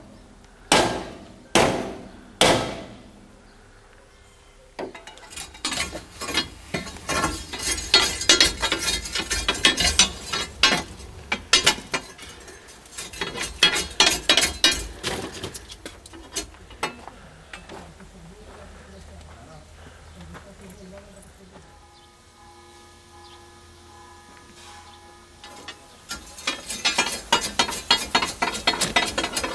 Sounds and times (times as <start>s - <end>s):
Speech: 17.0s - 21.8s.